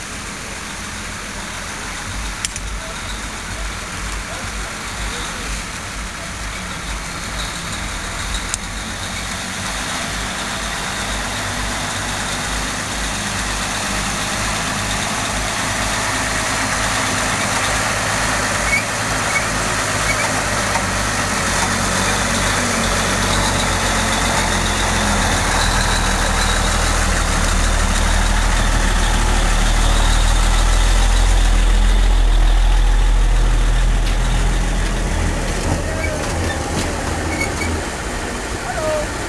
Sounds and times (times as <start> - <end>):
Truck: 0.0 - 39.2.